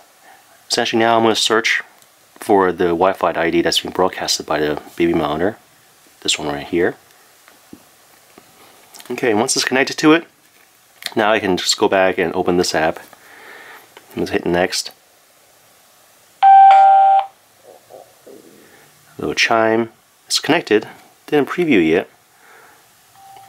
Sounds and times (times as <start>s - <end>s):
Speech: 0.7s - 5.6s, 6.2s - 7.0s, 9.0s - 10.3s, 11.1s - 13.1s, 14.1s - 15.0s, 19.2s - 22.2s.